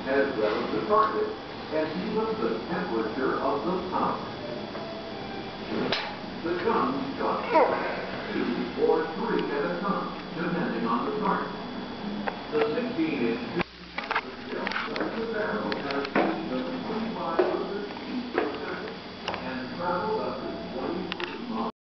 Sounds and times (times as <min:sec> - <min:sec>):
Speech: 0:00.0 - 0:04.4, 0:05.7 - 0:21.8.